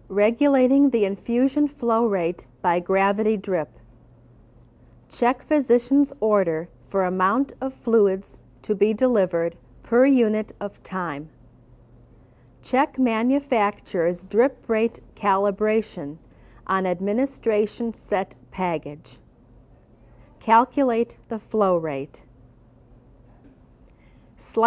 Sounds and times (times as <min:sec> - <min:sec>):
Speech: 0:00.1 - 0:03.8, 0:05.1 - 0:11.3, 0:12.6 - 0:19.2, 0:20.3 - 0:22.2, 0:24.4 - 0:24.6.